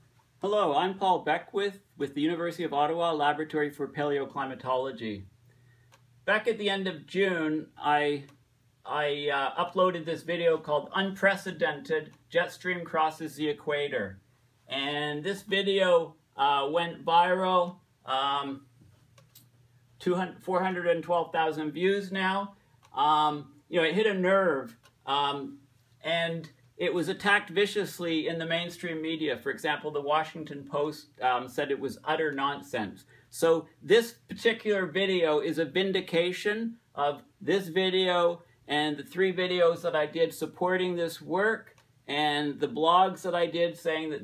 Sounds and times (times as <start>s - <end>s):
Speech: 0.4s - 5.3s, 6.2s - 18.7s, 20.0s - 44.2s.